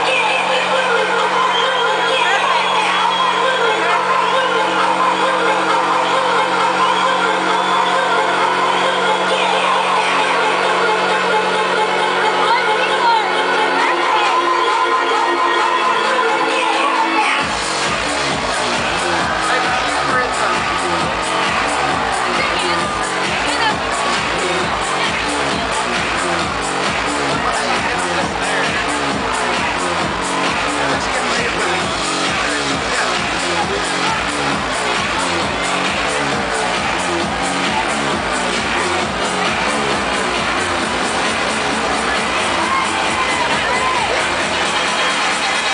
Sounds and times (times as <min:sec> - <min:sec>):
Crowd: 0:00.0 - 0:45.7
Music: 0:00.0 - 0:45.7
Speech: 0:00.0 - 0:45.7.